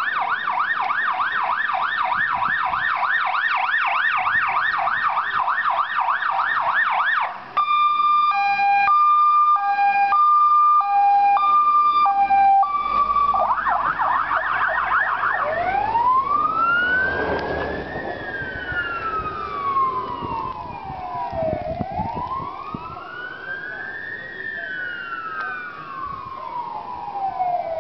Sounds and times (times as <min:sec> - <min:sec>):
Fire engine, fire truck (siren): 0:00.0 - 0:27.8.